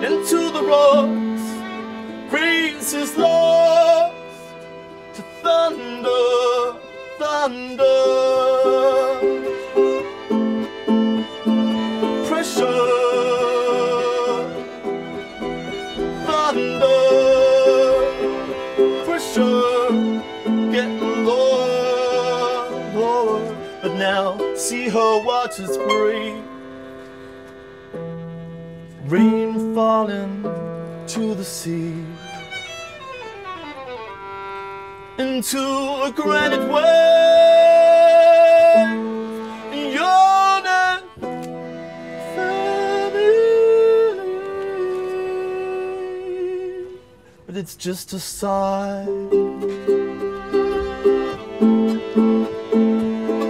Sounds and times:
Pizzicato: 0.0 - 34.9, 48.9 - 53.5
Harp: 0.0 - 35.2.

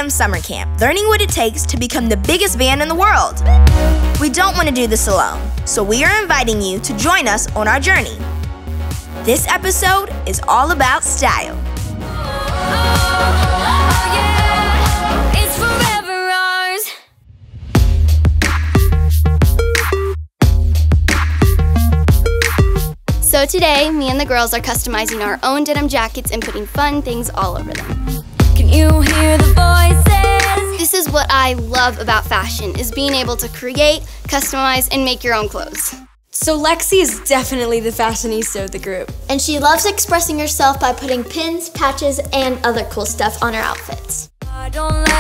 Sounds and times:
Speech: 0.0 - 8.2, 9.2 - 11.6, 23.2 - 27.9, 30.5 - 44.3
Music: 0.0 - 45.2.

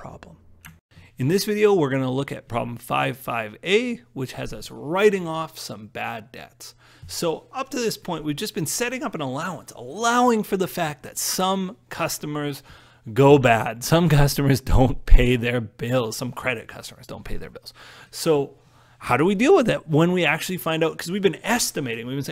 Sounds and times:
Speech: 0.0 - 0.4, 1.2 - 22.3.

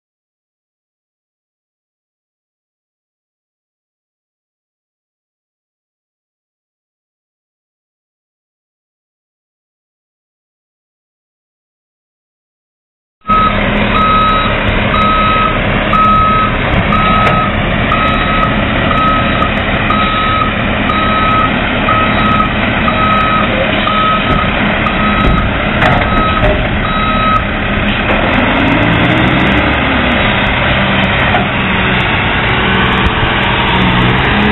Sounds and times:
Reversing beeps: 13.3 - 27.5.

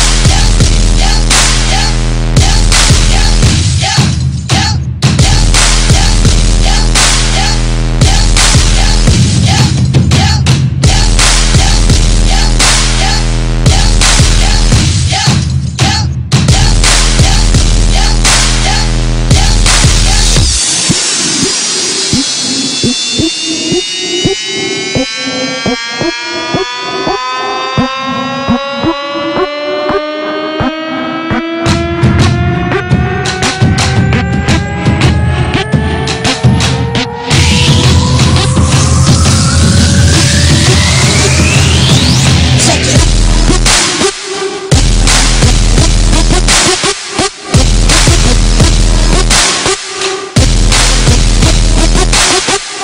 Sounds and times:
Music: 0.0 - 52.8
Siren: 24.6 - 42.3.

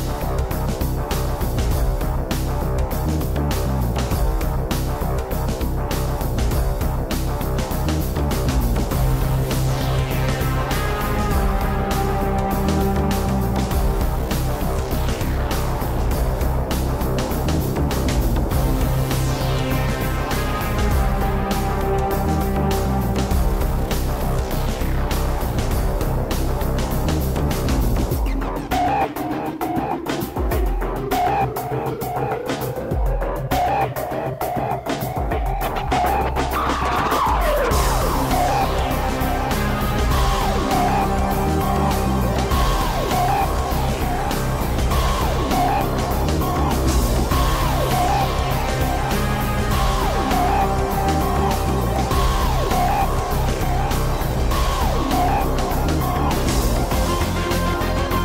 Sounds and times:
Music: 0.0 - 58.2.

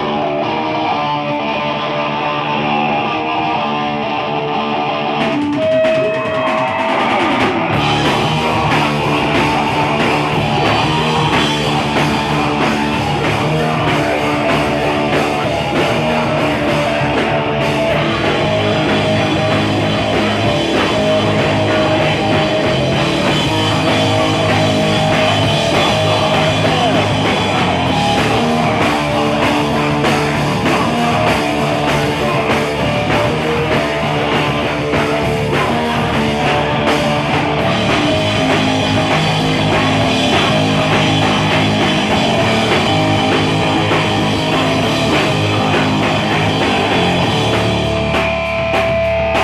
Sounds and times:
Blues: 0.0 - 49.4.

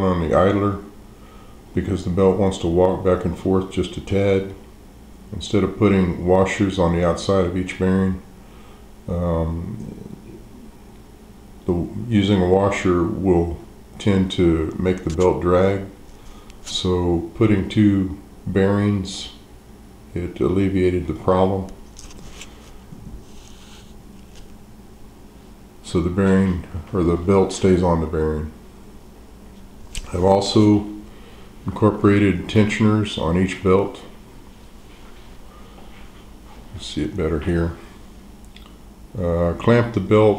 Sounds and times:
Speech: 0.0 - 1.0, 1.7 - 4.6, 5.3 - 8.3, 9.1 - 10.5, 11.6 - 16.0, 16.6 - 19.5, 20.1 - 21.8, 25.8 - 28.6, 30.0 - 34.2, 36.7 - 37.9, 39.1 - 40.3.

